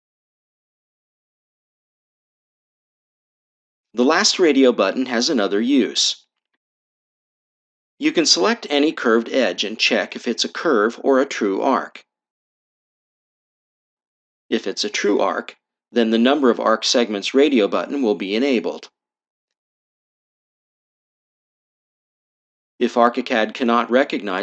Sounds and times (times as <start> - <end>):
Speech: 4.0 - 6.3, 8.0 - 12.1, 14.5 - 18.9, 22.8 - 24.4.